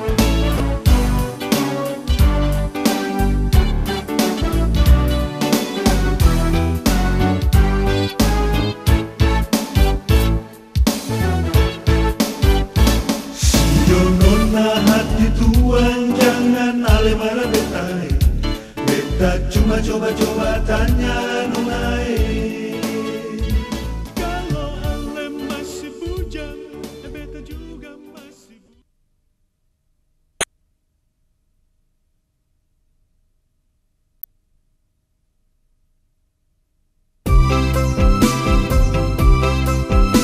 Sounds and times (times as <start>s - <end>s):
Music: 0.0s - 28.8s, 37.3s - 40.2s.